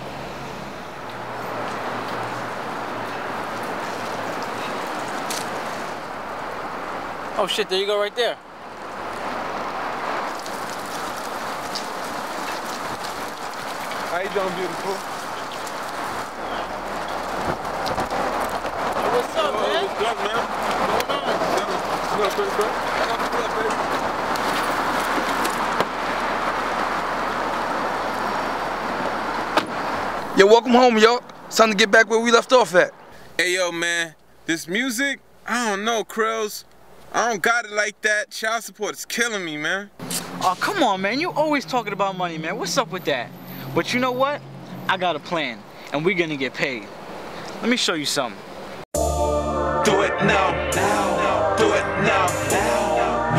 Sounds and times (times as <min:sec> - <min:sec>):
Speech: 0:14.1 - 0:15.0, 0:30.4 - 0:46.9, 0:47.6 - 0:48.4.